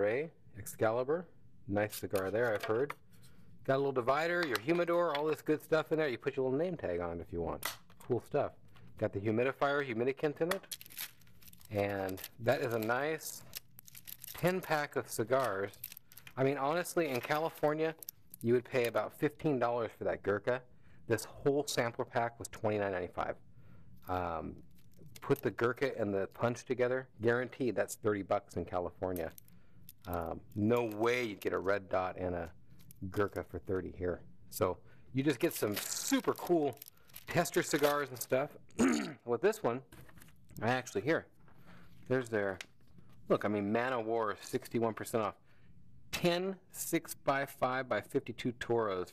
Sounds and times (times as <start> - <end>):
Speech: 0.0 - 3.0, 3.7 - 10.6, 11.7 - 13.5, 14.4 - 15.8, 16.4 - 23.4, 24.1 - 24.6, 25.2 - 29.4, 30.1 - 39.9, 40.6 - 41.3, 42.1 - 42.6, 43.3 - 45.4, 46.1 - 49.1.